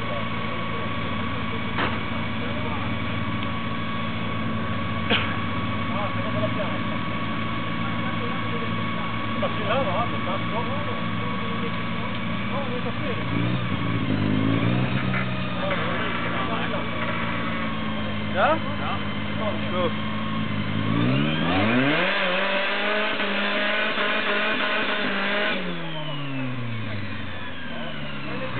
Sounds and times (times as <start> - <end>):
Speech: 0.0 - 3.1, 5.8 - 13.4, 15.5 - 17.1, 18.3 - 20.0, 25.8 - 28.5.